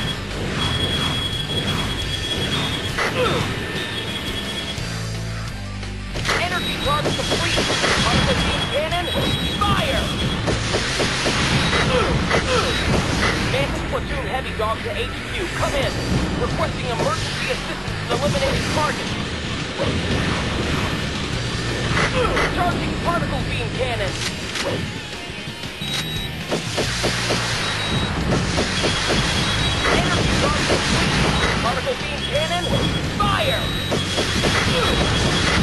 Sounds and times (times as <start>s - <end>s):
Music: 0.0s - 35.6s
Speech: 13.5s - 19.0s, 22.2s - 24.2s, 29.9s - 30.8s, 31.6s - 33.7s.